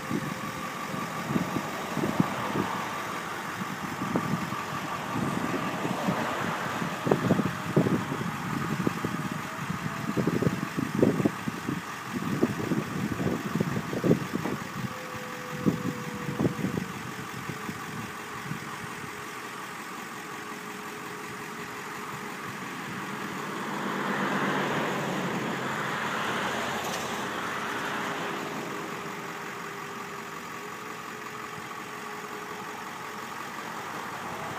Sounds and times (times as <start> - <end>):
Truck: 0.0 - 34.5.